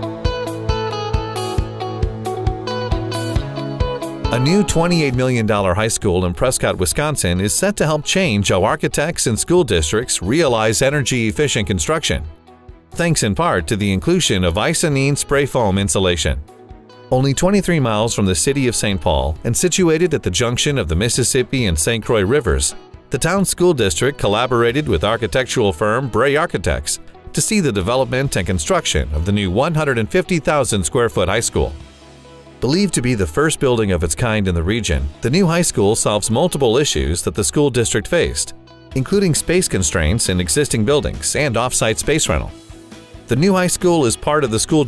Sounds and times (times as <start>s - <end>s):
Music: 0.0s - 44.8s
Speech: 4.3s - 12.3s, 13.0s - 16.4s, 17.1s - 31.8s, 32.6s - 42.5s, 43.3s - 44.8s.